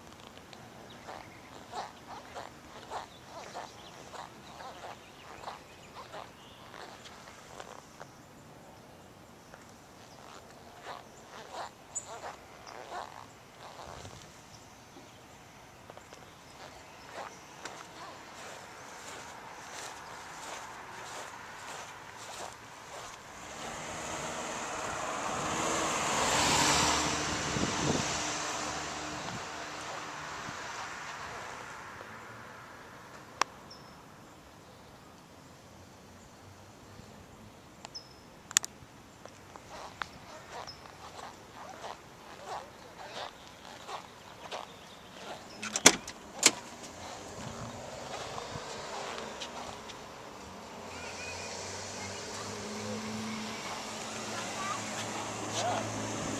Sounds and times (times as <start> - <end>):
Wind noise (microphone): 27.4 - 28.2.